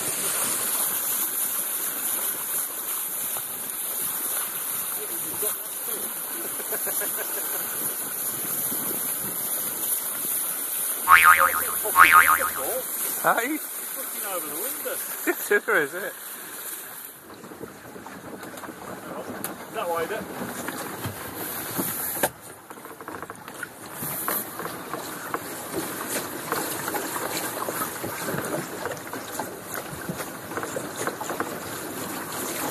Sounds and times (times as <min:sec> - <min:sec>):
Stream: 0:00.0 - 0:32.7
Speech: 0:12.6 - 0:16.1, 0:19.1 - 0:20.2.